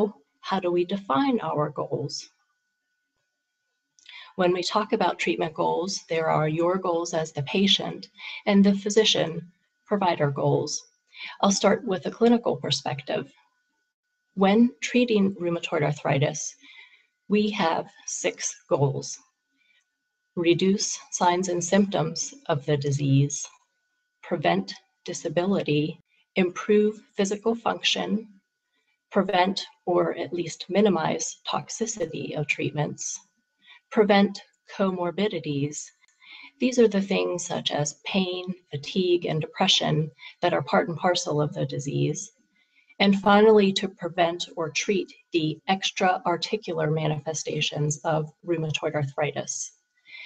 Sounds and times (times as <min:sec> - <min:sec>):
Narration, monologue: 0:00.0 - 0:50.2.